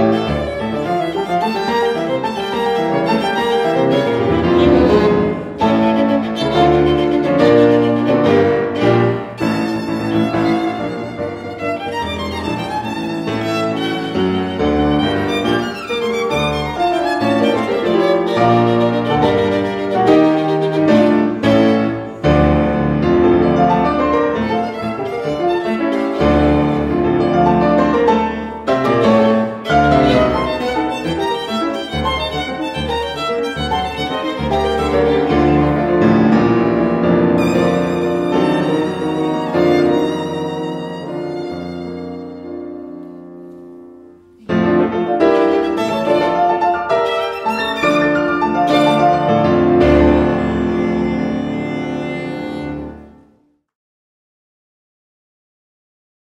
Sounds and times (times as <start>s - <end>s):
Violin, fiddle: 0.0s - 43.2s, 44.4s - 53.3s.